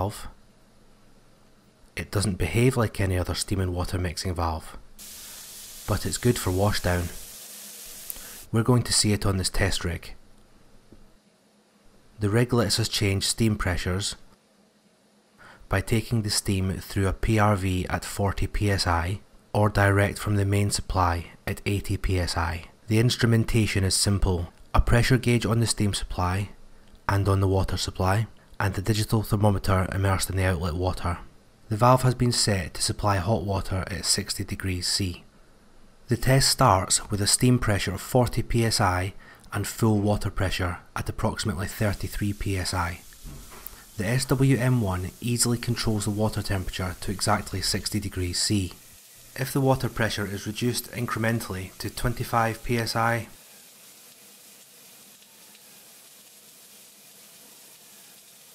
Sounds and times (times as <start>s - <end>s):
Speech: 0.0s - 0.4s, 2.0s - 4.8s, 5.9s - 7.2s, 8.5s - 10.2s, 12.2s - 14.3s, 15.7s - 35.3s, 36.1s - 43.1s, 44.0s - 48.8s, 49.4s - 53.4s.